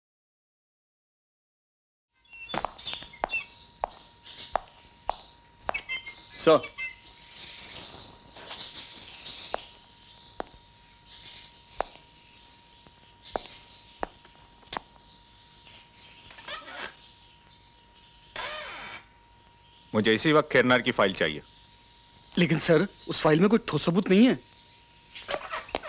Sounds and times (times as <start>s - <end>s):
Chirp, tweet: 2.2s - 25.8s.